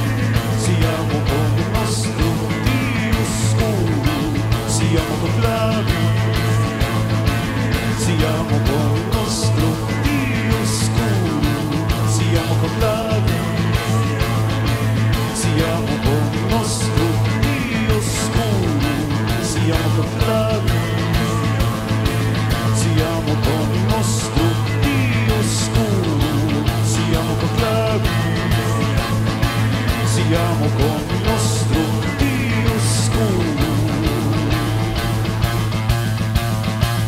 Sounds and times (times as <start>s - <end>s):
Singing: 0.0s - 7.0s, 7.8s - 34.9s.